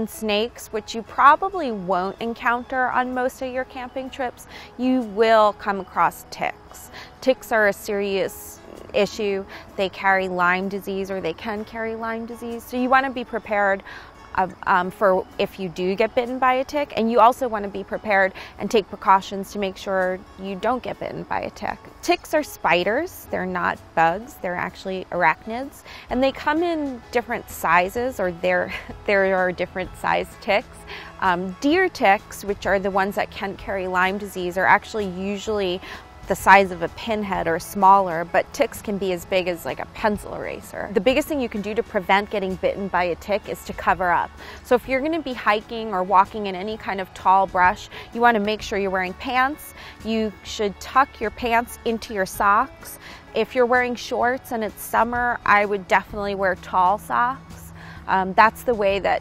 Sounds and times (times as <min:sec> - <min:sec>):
Speech: 0:00.0 - 0:13.8, 0:14.4 - 0:30.6, 0:31.2 - 0:59.2
Music: 0:00.0 - 0:59.2.